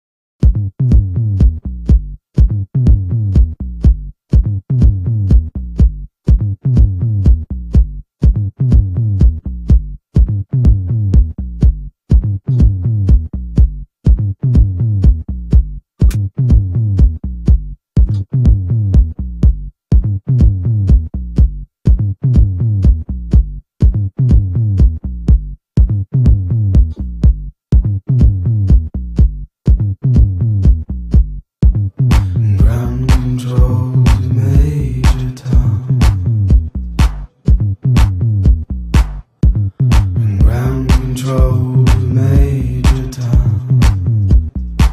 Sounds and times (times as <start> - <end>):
Drum machine: 0.4 - 44.9.